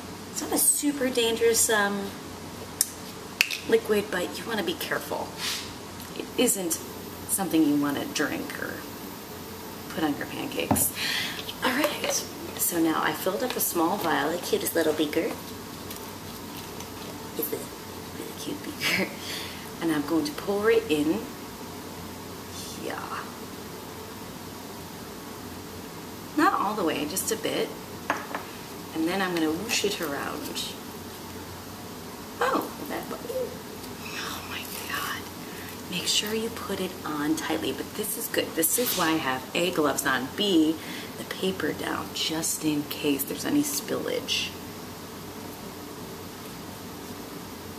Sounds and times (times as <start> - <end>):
Speech: 0.4 - 2.2, 3.7 - 5.3, 6.1 - 8.9, 9.9 - 10.9, 11.6 - 15.4, 17.4 - 19.2, 19.8 - 21.3, 22.6 - 23.4, 26.4 - 27.8, 28.9 - 30.8, 32.4 - 35.2, 35.9 - 44.6.